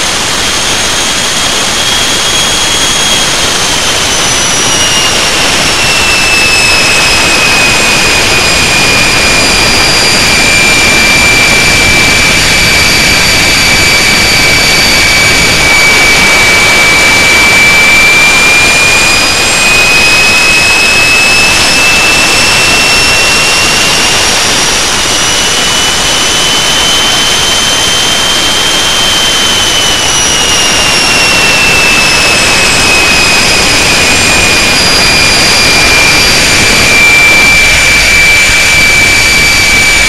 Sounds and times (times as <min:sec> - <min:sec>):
Jet engine: 0:00.0 - 0:40.0.